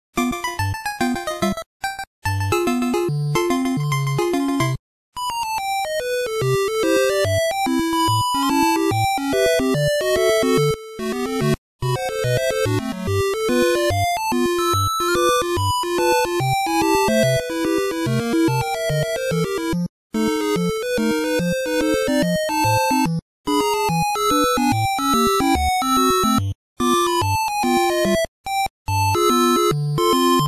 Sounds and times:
Video game music: 0.2s - 30.4s.

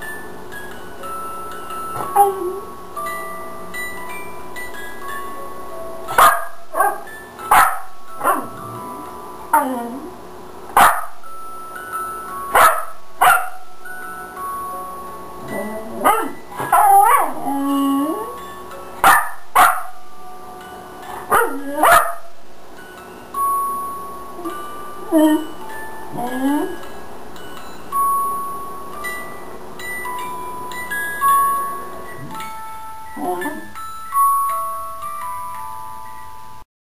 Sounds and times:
Music: 0.0s - 36.6s
Bow-wow: 6.2s - 7.0s, 12.6s - 13.5s, 21.3s - 22.2s
Yip: 6.2s - 8.5s, 10.8s - 11.1s, 12.6s - 13.6s, 16.0s - 17.4s, 19.0s - 19.9s, 21.3s - 22.3s.

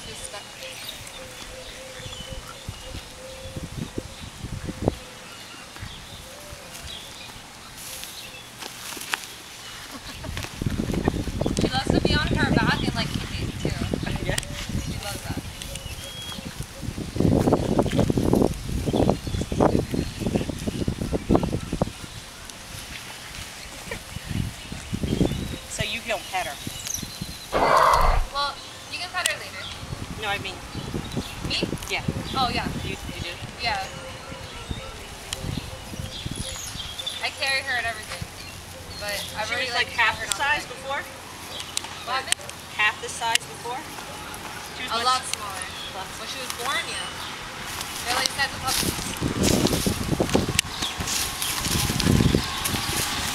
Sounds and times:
Roaring cats (lions, tigers): 27.6s - 28.4s.

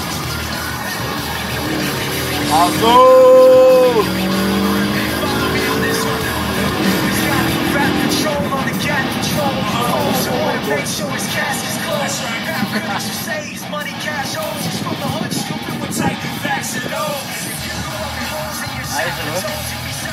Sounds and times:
Car: 0.0s - 20.1s
Music: 0.0s - 20.1s
Speech: 2.4s - 4.1s, 7.8s - 16.7s, 18.8s - 19.7s.

